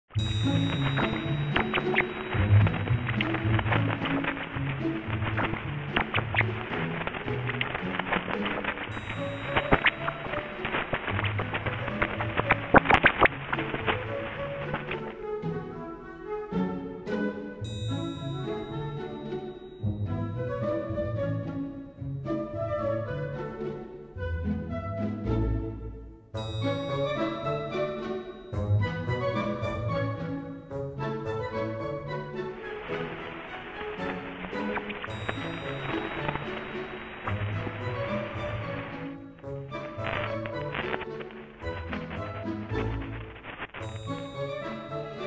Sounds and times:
Music: 0.1 - 45.2.

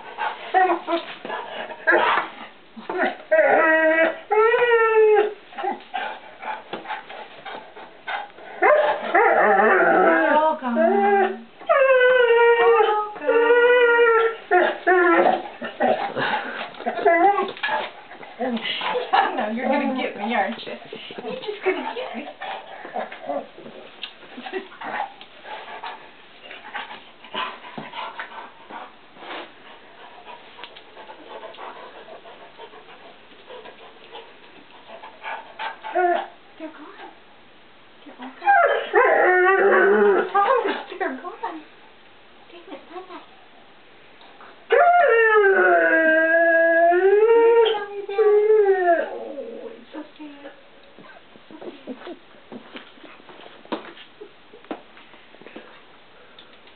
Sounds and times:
Speech: 10.1 - 11.4, 18.4 - 22.4, 36.6 - 37.2, 38.0 - 38.4, 40.2 - 41.7, 42.5 - 43.3, 49.6 - 50.6.

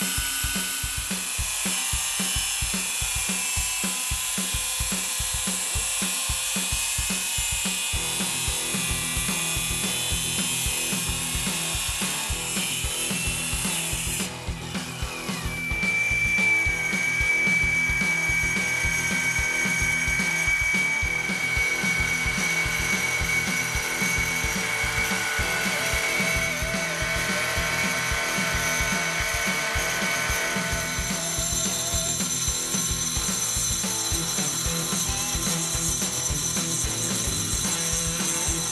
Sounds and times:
Music: 0.0 - 38.7
Power tool: 0.0 - 38.7.

